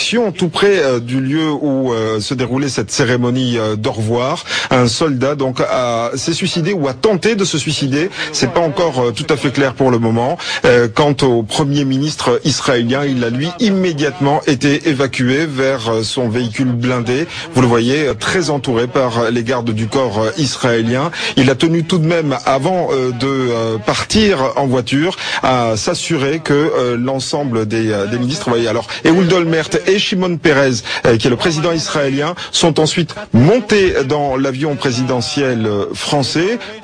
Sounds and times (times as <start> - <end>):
Male speech, man speaking: 0.0 - 36.8
Narration, monologue: 0.0 - 36.8.